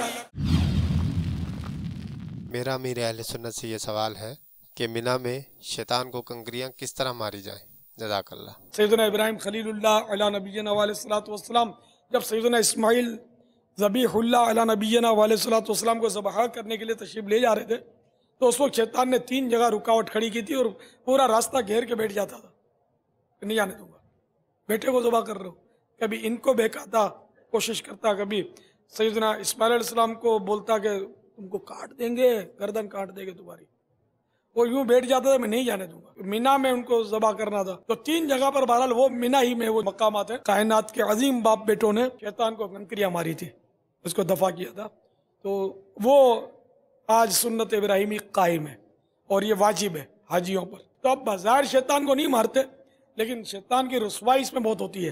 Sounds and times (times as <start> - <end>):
Narration, monologue: 2.4 - 55.1
Male speech, man speaking: 2.5 - 22.5, 23.4 - 24.0, 24.7 - 33.7, 34.6 - 55.1.